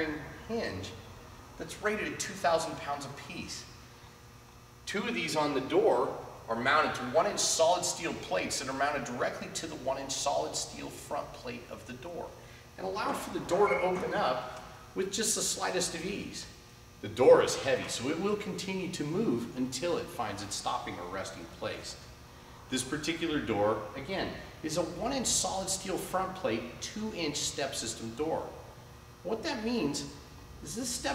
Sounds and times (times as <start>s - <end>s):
Speech: 0.0s - 1.0s, 1.6s - 3.8s, 4.9s - 22.1s, 22.7s - 28.6s, 29.2s - 31.1s.